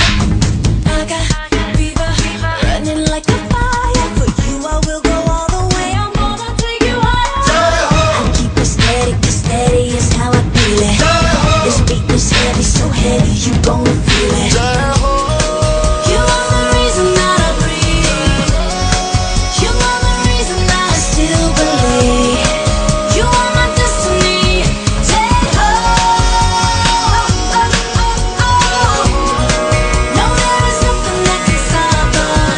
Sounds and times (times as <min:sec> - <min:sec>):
Music: 0:00.0 - 0:32.5.